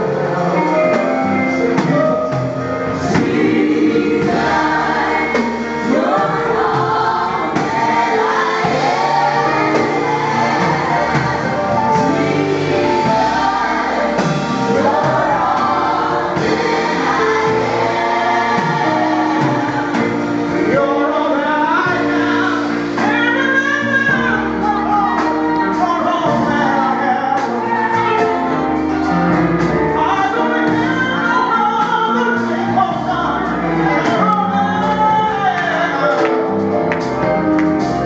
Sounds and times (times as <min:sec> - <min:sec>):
Gospel music: 0:00.0 - 0:38.0.